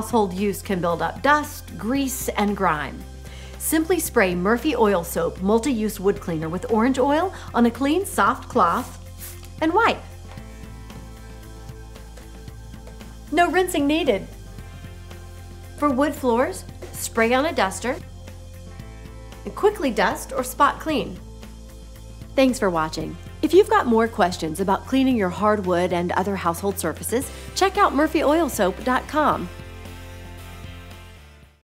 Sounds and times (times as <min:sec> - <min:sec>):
Speech: 0:00.0 - 0:03.0, 0:03.6 - 0:09.0, 0:09.6 - 0:10.1, 0:13.3 - 0:14.3, 0:15.8 - 0:18.0, 0:19.5 - 0:21.2, 0:22.4 - 0:29.5
Music: 0:00.0 - 0:31.6.